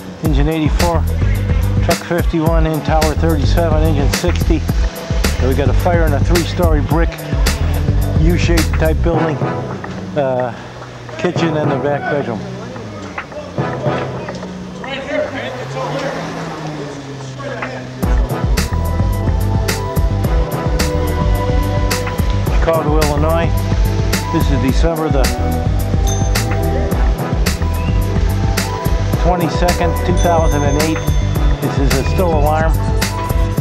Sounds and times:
Music: 0:00.0 - 0:16.4, 0:17.4 - 0:33.6
Speech: 0:00.2 - 0:04.6, 0:05.4 - 0:07.2, 0:08.2 - 0:09.4, 0:10.2 - 0:16.3, 0:22.5 - 0:23.5, 0:24.3 - 0:25.4, 0:29.2 - 0:32.8.

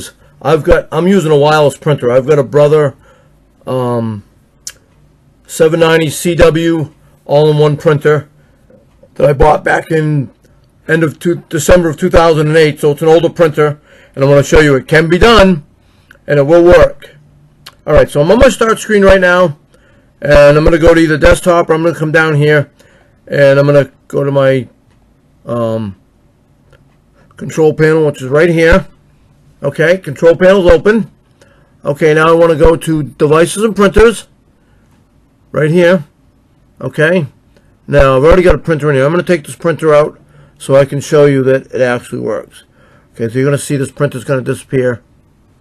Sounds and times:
Speech: 0:00.0 - 0:03.0, 0:03.6 - 0:04.8, 0:05.5 - 0:08.3, 0:09.1 - 0:19.6, 0:20.2 - 0:24.8, 0:25.4 - 0:26.0, 0:27.3 - 0:29.0, 0:29.6 - 0:31.2, 0:31.8 - 0:34.4, 0:35.5 - 0:36.2, 0:36.8 - 0:45.1.

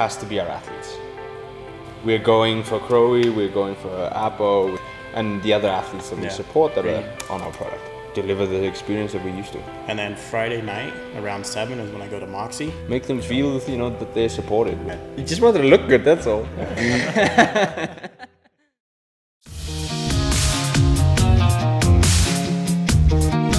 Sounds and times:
Music: 0:00.0 - 0:18.1, 0:19.4 - 0:23.5
Speech: 0:02.1 - 0:16.6.

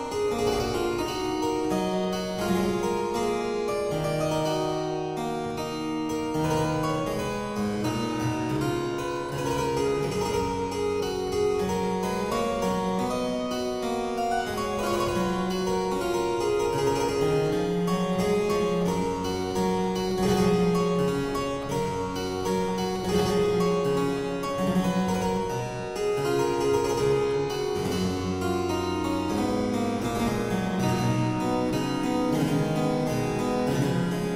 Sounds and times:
Harpsichord: 0:00.0 - 0:34.3.

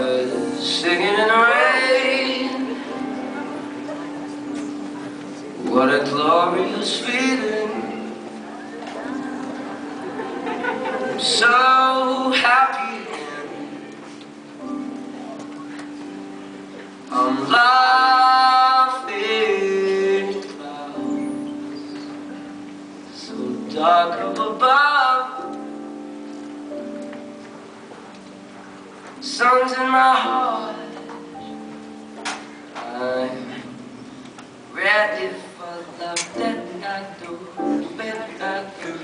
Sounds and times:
Male singing: 0:00.0 - 0:02.9, 0:05.6 - 0:08.2, 0:11.2 - 0:13.9, 0:17.1 - 0:21.3, 0:23.1 - 0:25.5, 0:29.2 - 0:31.1, 0:32.8 - 0:33.8, 0:34.7 - 0:39.0
Music: 0:00.0 - 0:39.0.

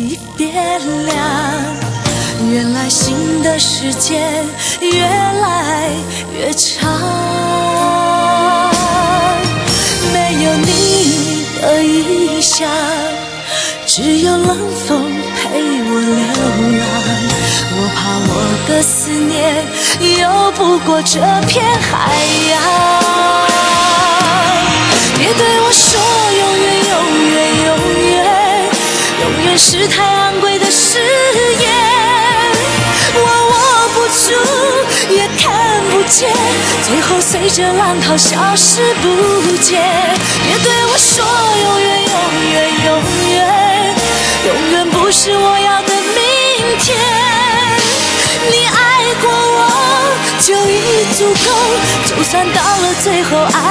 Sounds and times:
Music: 0:00.0 - 0:53.7.

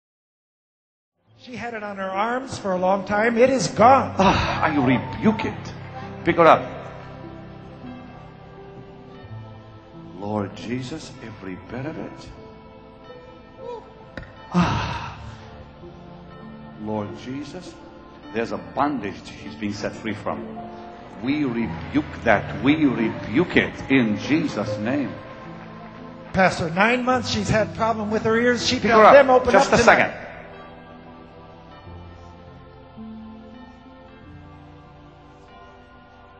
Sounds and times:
Music: 0:01.2 - 0:36.3
Speech: 0:01.4 - 0:06.7, 0:21.2 - 0:25.2, 0:26.4 - 0:30.2.

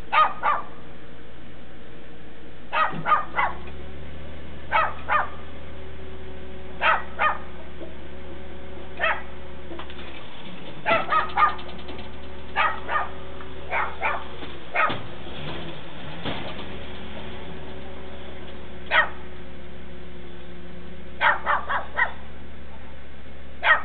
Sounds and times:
Car: 0:00.0 - 0:23.8.

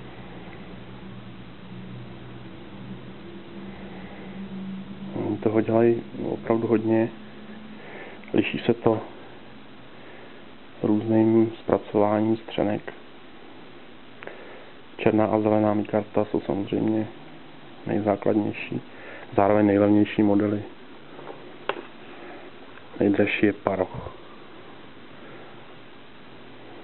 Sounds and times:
Inside, small room: 0:00.0 - 0:26.8
Speech: 0:05.2 - 0:07.2, 0:08.3 - 0:09.1, 0:10.8 - 0:13.0, 0:15.0 - 0:17.2, 0:17.8 - 0:20.8, 0:23.0 - 0:24.2.

